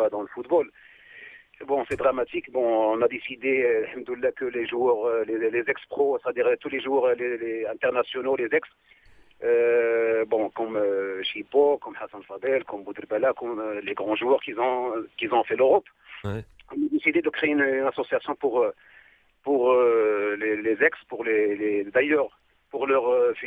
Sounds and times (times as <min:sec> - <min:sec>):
Speech: 0:00.0 - 0:00.8, 0:01.6 - 0:08.7, 0:09.4 - 0:18.8, 0:19.5 - 0:23.4.